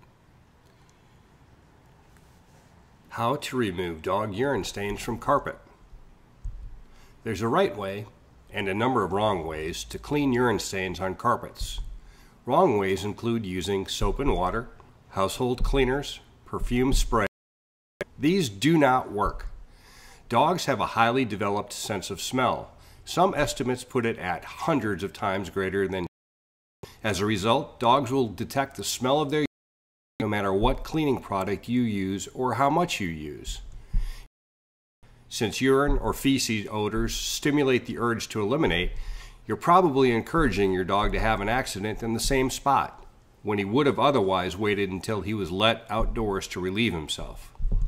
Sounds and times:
Speech: 3.1 - 5.8, 7.2 - 11.9, 12.5 - 17.3, 18.1 - 19.5, 20.3 - 26.1, 27.0 - 29.5, 30.2 - 33.6, 35.3 - 47.5.

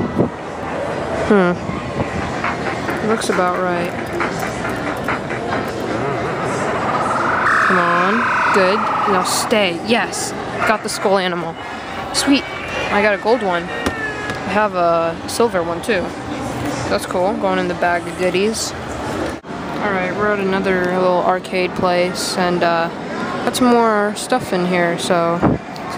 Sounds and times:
Inside, public space: 0.0 - 25.9.

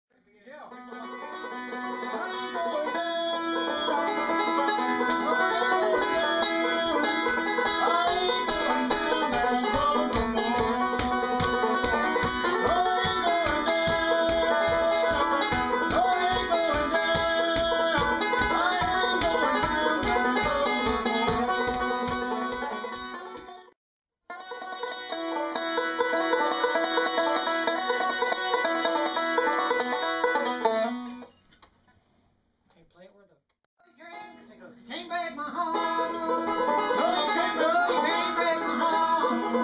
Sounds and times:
Banjo: 0.7 - 23.7, 24.3 - 31.4, 35.6 - 39.6
Country: 0.7 - 23.7, 24.3 - 31.4, 34.0 - 39.6.

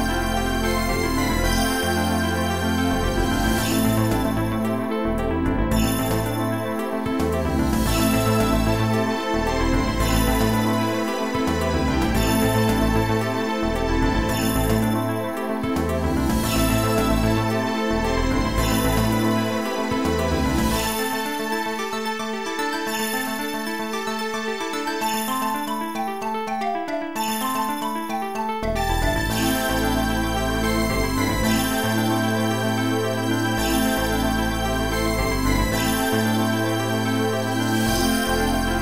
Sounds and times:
Rhythm and blues: 0.0 - 38.8
Soundtrack music: 0.0 - 38.8.

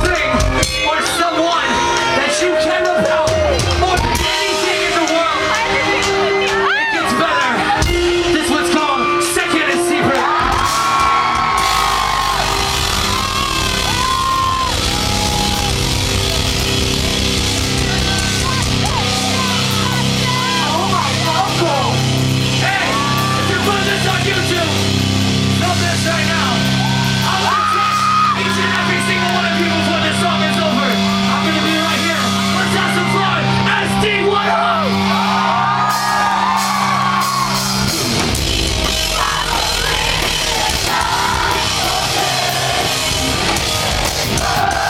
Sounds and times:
Music: 0.0 - 44.8.

